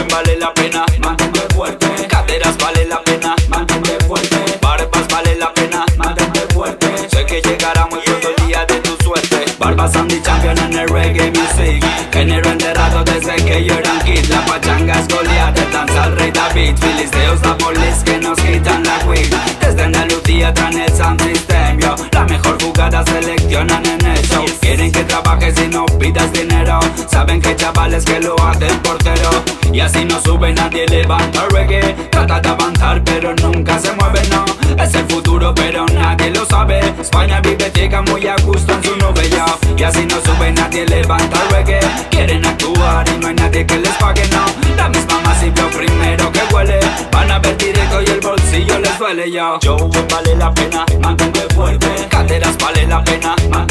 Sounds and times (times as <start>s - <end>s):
Music: 0.0s - 53.7s.